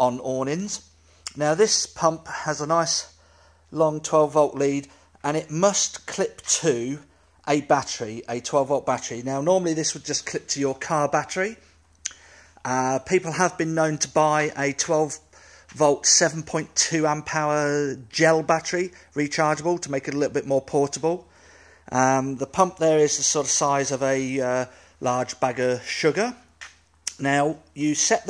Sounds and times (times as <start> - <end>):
Speech: 0.0 - 11.6, 12.6 - 21.3, 21.9 - 26.5, 27.1 - 28.3.